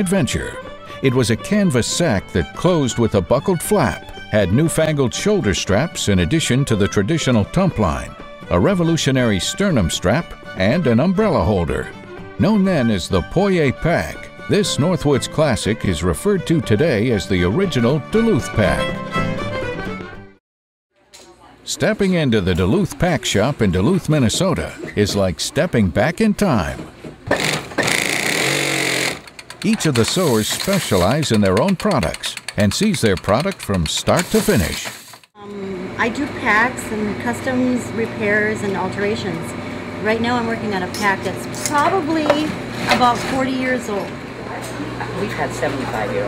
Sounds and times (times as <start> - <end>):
Speech: 0.0 - 19.0, 21.0 - 26.9, 29.6 - 46.2
Music: 0.0 - 20.4.